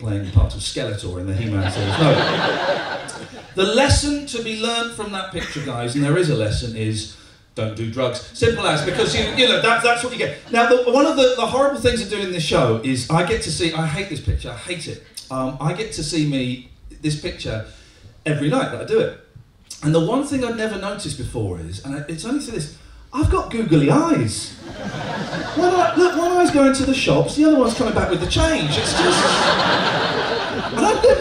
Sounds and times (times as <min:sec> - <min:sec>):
Speech: 0:00.0 - 0:02.3, 0:03.6 - 0:24.6, 0:25.6 - 0:29.4, 0:30.8 - 0:31.2.